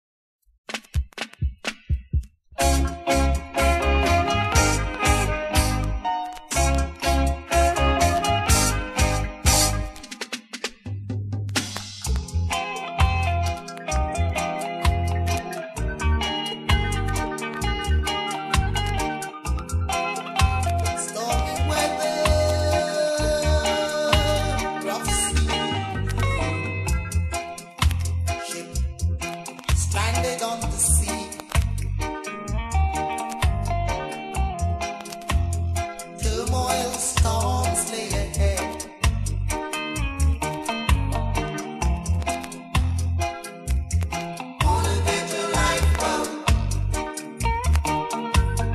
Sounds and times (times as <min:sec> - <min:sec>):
Music: 0:00.7 - 0:48.7.